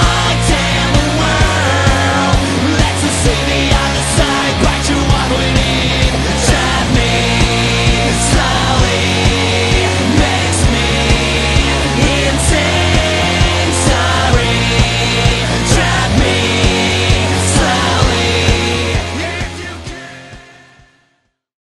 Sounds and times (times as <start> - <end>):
Music: 0.0 - 21.5.